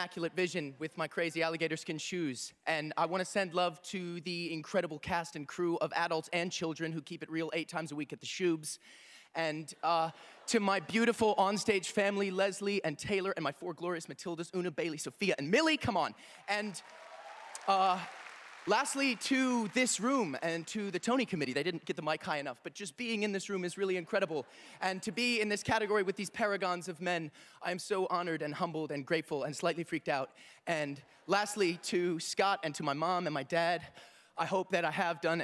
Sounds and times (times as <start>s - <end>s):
Male speech, man speaking: 0.0s - 8.8s, 9.4s - 16.8s, 17.6s - 18.1s, 18.7s - 35.4s
Narration, monologue: 0.0s - 35.4s.